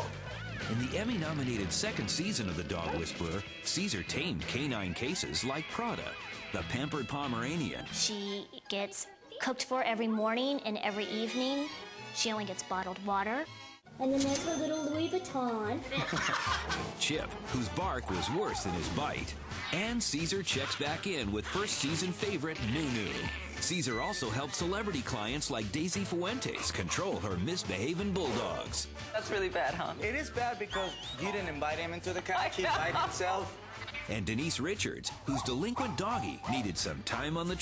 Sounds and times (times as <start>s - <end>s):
Music: 0.0s - 37.6s
Speech: 0.7s - 12.8s, 17.0s - 33.5s, 34.1s - 37.6s
Whimper (dog): 23.3s - 24.4s, 35.3s - 36.7s.